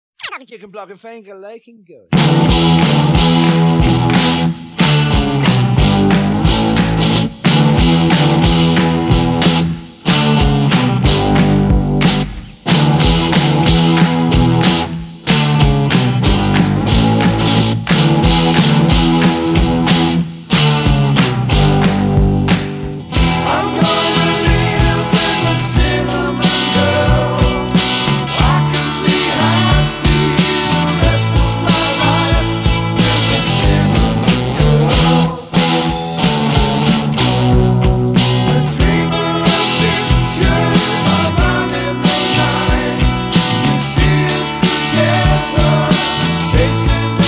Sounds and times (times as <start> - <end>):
Independent music: 0.3 - 47.2.